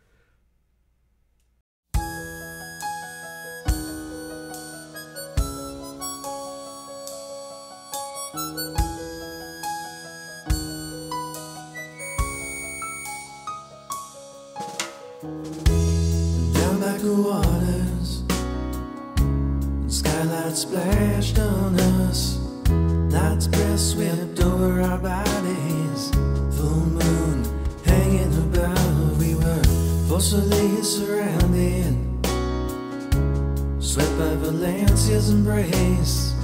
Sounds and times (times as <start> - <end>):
Music: 1.9 - 36.4.